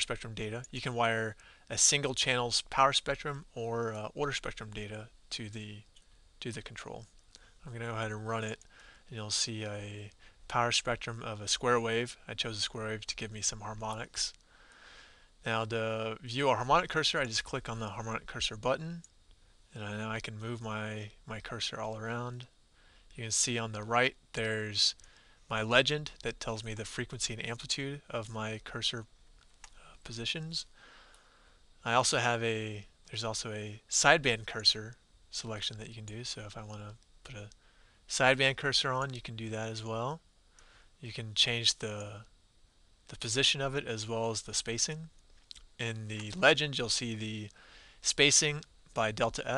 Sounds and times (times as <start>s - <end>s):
Speech: 0.0s - 14.4s, 15.4s - 19.1s, 19.7s - 29.1s, 29.8s - 30.8s, 31.8s - 40.2s, 41.0s - 42.3s, 43.1s - 49.5s.